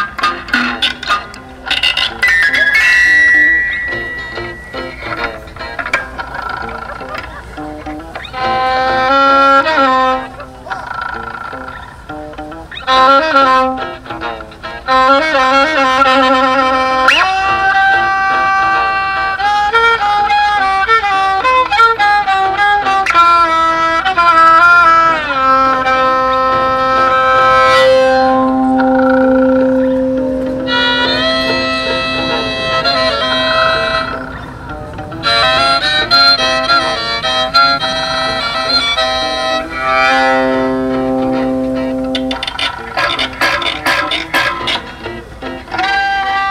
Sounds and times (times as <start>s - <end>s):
Musical instrument: 0.0s - 46.5s
Outside, rural or natural: 0.0s - 46.5s.